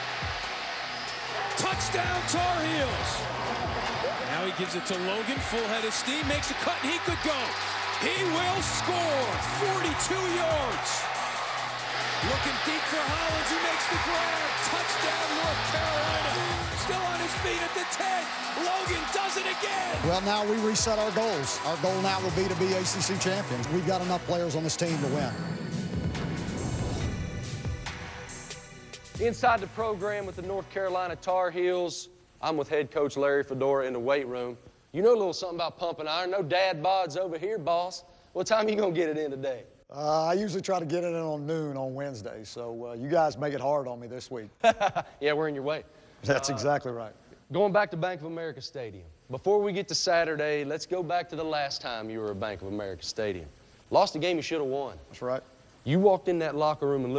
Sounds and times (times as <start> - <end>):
Music: 0.0 - 31.8
Speech: 4.3 - 11.0, 12.2 - 25.4, 29.2 - 44.5, 45.2 - 57.1.